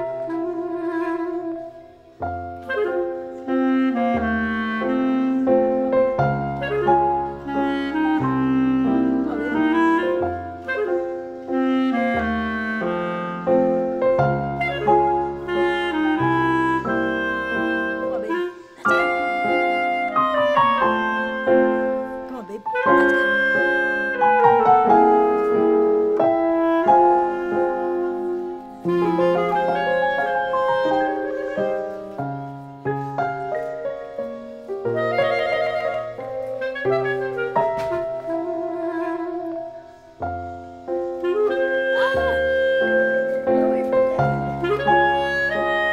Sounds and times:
Music: 0:00.0 - 0:45.9
Speech: 0:22.2 - 0:23.4, 0:41.8 - 0:44.4.

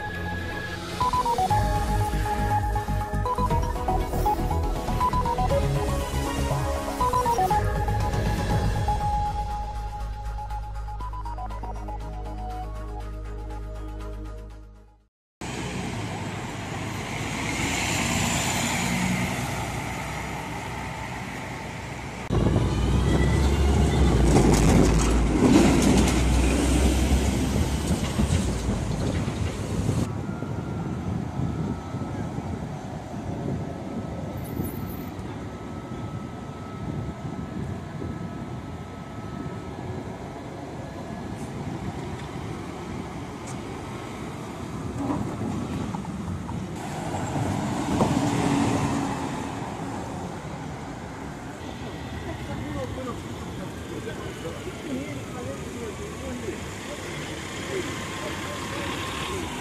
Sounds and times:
Bus: 0:00.0 - 0:59.6.

